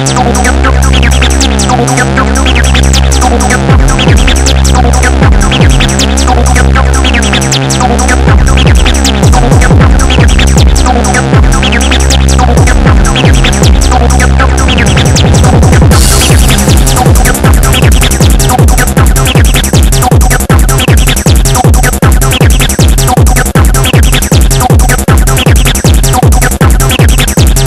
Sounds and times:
Background music: 0.0 - 25.5.

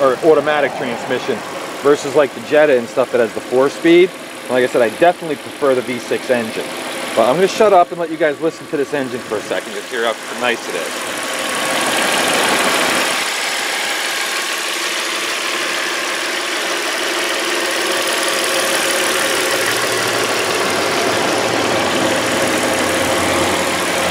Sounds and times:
Idling: 0.0 - 24.1
Vehicle: 0.0 - 24.1.

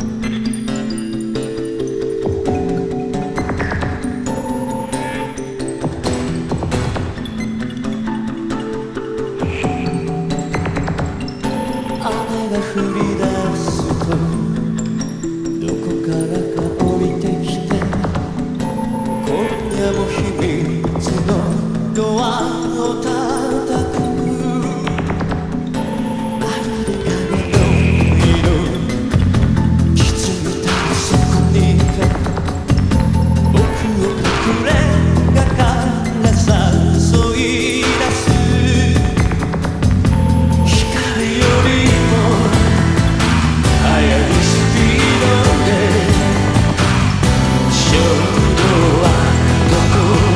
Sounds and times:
Music: 0.0 - 50.3.

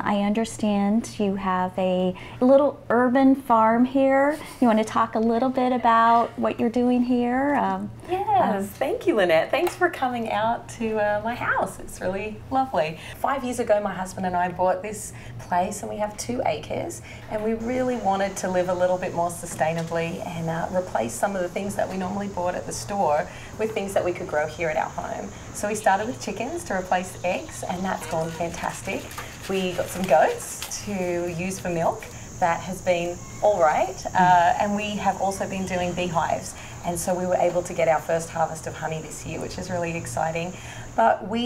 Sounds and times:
Speech: 0.0 - 41.4.

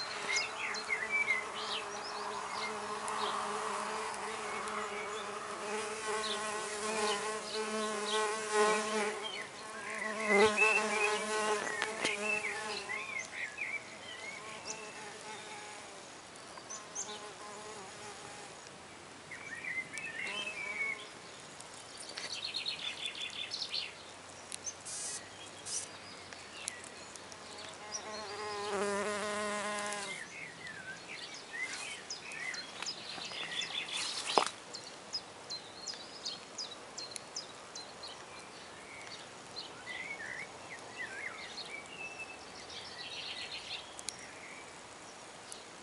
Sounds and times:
Bee, wasp, etc.: 0.0 - 18.7, 20.2 - 21.2, 24.8 - 26.0, 27.2 - 30.4.

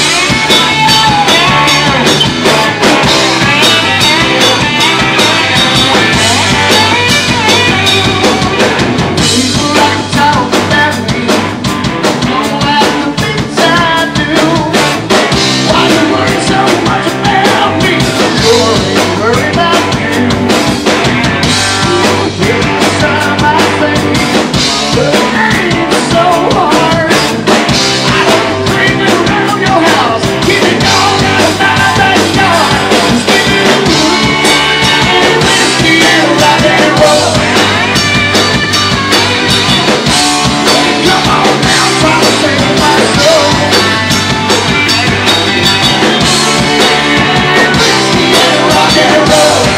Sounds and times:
Rock and roll: 0.0 - 49.7.

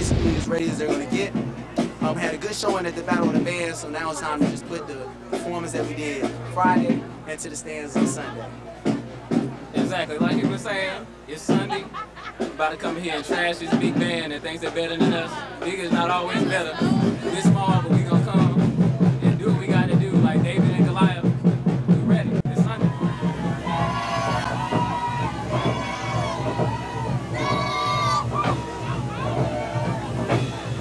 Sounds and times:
Speech: 0.0 - 1.4, 2.0 - 8.5, 9.8 - 11.9, 12.6 - 22.8
Music: 0.0 - 30.8.

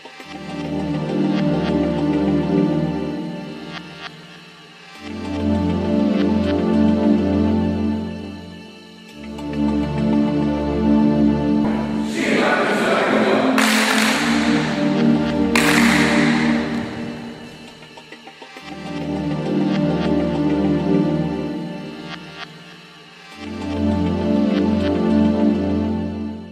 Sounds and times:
Music: 0.0 - 26.5.

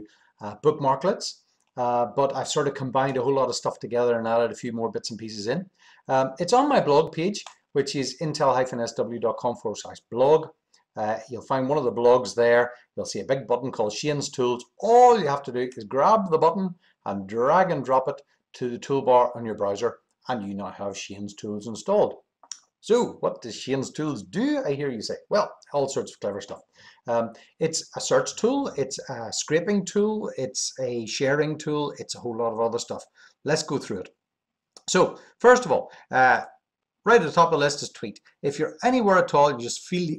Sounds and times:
Speech: 0.0 - 22.2, 22.8 - 34.1, 34.8 - 36.5, 37.1 - 40.1.

